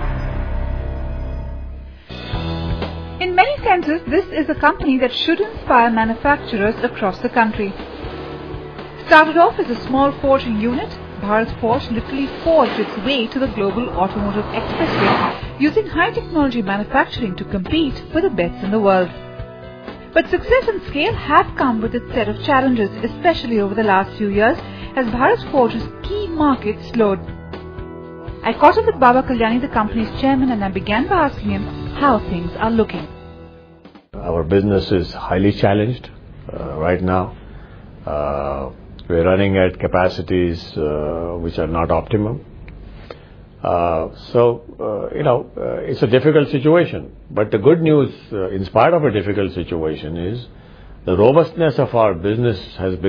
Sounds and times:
Music: 0.0 - 37.4
Speech: 3.2 - 7.8, 9.1 - 15.0, 15.6 - 19.1, 20.2 - 27.2, 28.4 - 33.1, 34.2 - 37.4, 38.1 - 42.4, 43.6 - 50.5, 51.1 - 53.0.

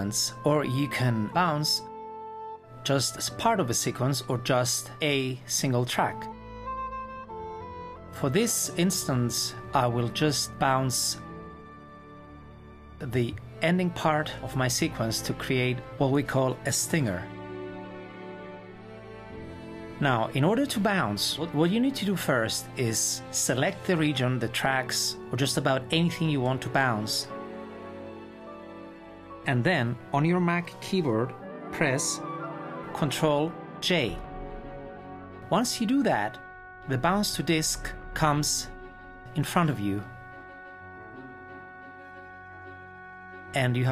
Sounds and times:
Speech: 0.0 - 1.9, 2.8 - 6.3, 8.2 - 11.3, 13.0 - 17.3, 20.0 - 27.4, 29.4 - 32.2, 32.9 - 34.3, 35.5 - 40.2, 43.5 - 43.9
Music: 0.0 - 43.9.

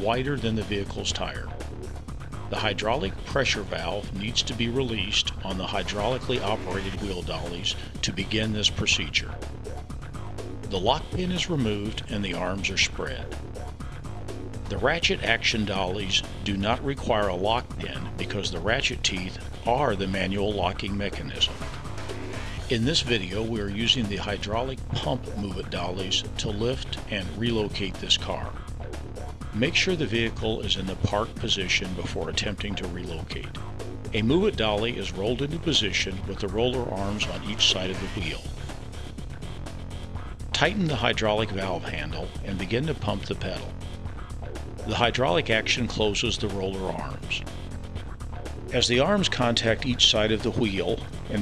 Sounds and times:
Speech: 0.0 - 1.6, 2.5 - 9.4, 10.7 - 13.4, 14.7 - 21.6, 22.7 - 28.6, 29.6 - 33.6, 34.2 - 38.5, 40.6 - 43.7, 44.9 - 47.4, 48.7 - 51.4
Music: 0.0 - 51.4.

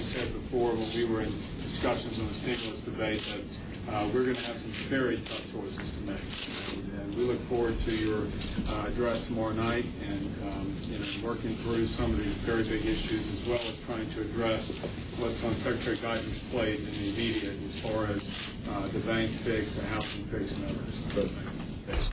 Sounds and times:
Speech: 0.0 - 22.1.

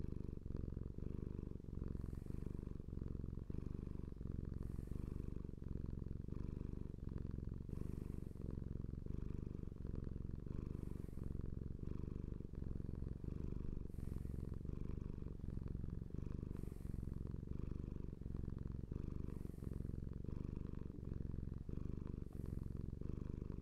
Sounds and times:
Purr: 0.0 - 23.6.

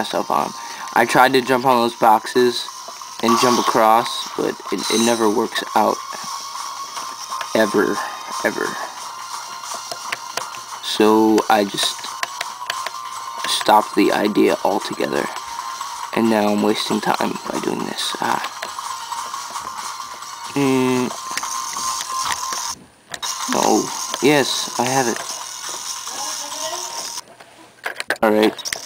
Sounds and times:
Speech: 0.0 - 6.0, 7.6 - 8.8, 10.8 - 12.0, 13.5 - 15.4, 16.2 - 18.5, 20.6 - 21.1, 23.5 - 25.2, 28.2 - 28.6
Music: 0.0 - 27.2.

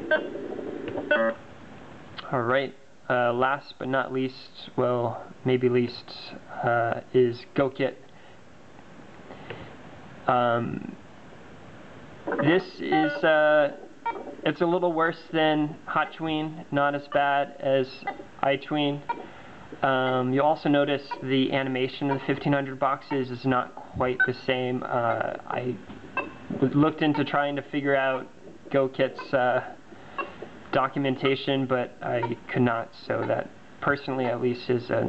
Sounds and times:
Speech: 2.2 - 8.0, 10.3 - 11.0, 12.4 - 13.8, 14.5 - 19.1, 19.8 - 25.8, 26.6 - 29.8, 30.7 - 35.0.

